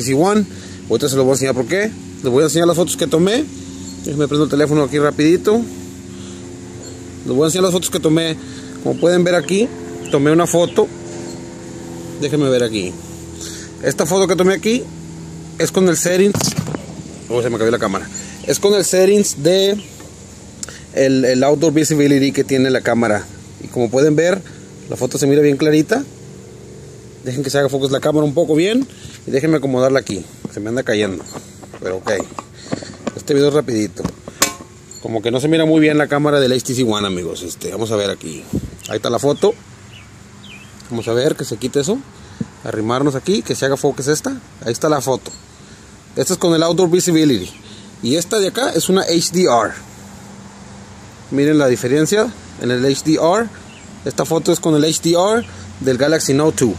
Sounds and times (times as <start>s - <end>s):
Speech: 0.0s - 5.7s, 7.2s - 10.9s, 12.2s - 13.0s, 13.8s - 14.9s, 15.6s - 16.6s, 17.3s - 19.9s, 20.9s - 26.1s, 27.2s - 32.4s, 33.1s - 34.2s, 35.0s - 39.6s, 40.8s - 45.4s, 46.2s - 49.8s, 51.3s - 56.7s.